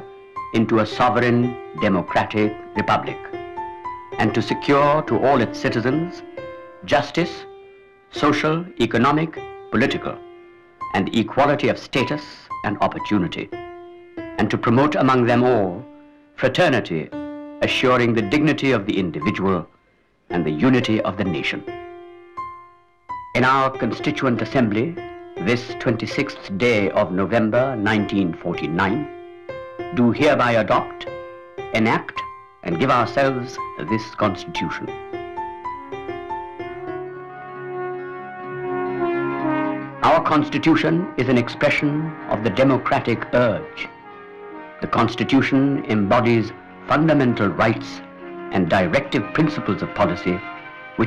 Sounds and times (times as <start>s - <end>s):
Narration, monologue: 0.0s - 36.9s, 39.2s - 51.0s
Music: 0.0s - 51.0s
Male speech, man speaking: 0.6s - 3.4s, 4.2s - 6.2s, 6.8s - 7.5s, 8.2s - 10.2s, 10.9s - 13.5s, 14.4s - 15.8s, 16.4s - 19.7s, 20.3s - 21.7s, 23.4s - 29.1s, 30.0s - 31.1s, 31.8s - 35.0s, 40.0s - 43.9s, 44.8s - 50.4s.